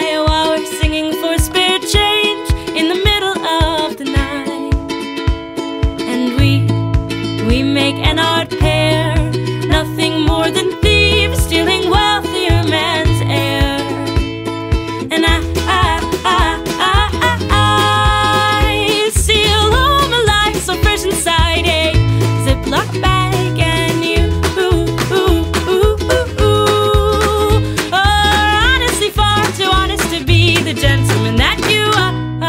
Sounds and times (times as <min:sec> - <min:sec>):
Happy music: 0:00.0 - 0:32.4.